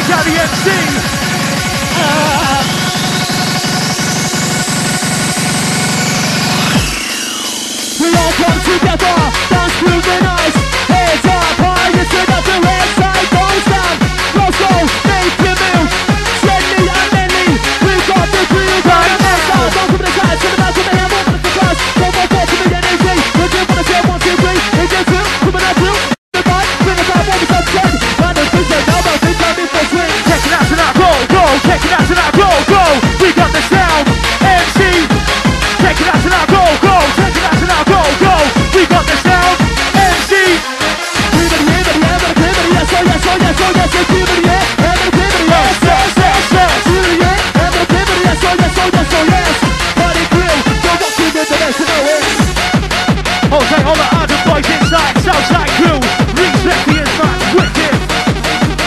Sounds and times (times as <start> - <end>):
Hip hop music: 0.0 - 58.8.